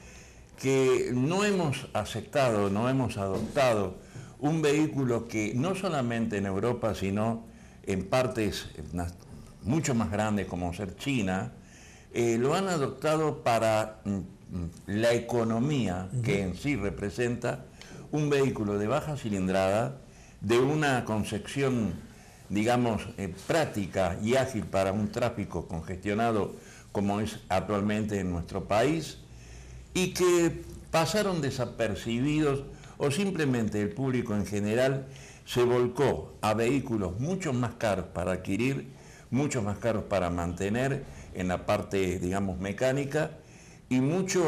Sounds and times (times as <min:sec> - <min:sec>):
Speech: 0:00.6 - 0:29.2, 0:30.0 - 0:44.4.